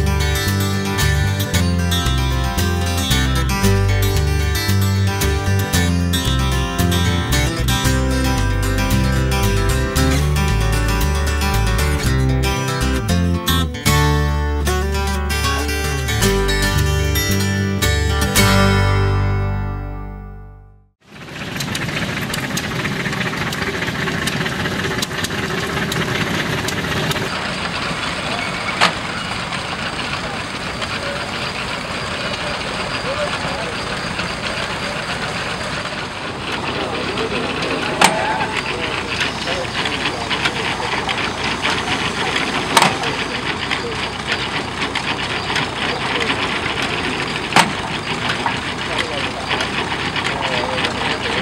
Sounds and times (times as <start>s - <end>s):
Vehicle: 0.0s - 20.2s, 21.0s - 51.4s
Medium engine (mid frequency): 0.0s - 20.3s, 21.0s - 51.4s
Heavy engine (low frequency): 0.0s - 51.4s.